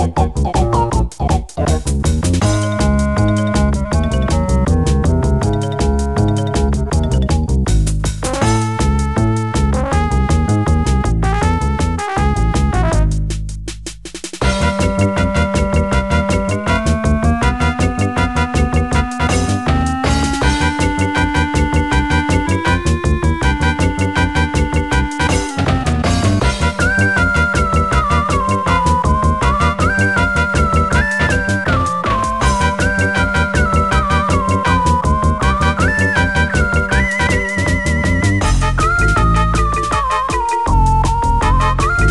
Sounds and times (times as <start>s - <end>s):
Music: 0.0s - 42.1s.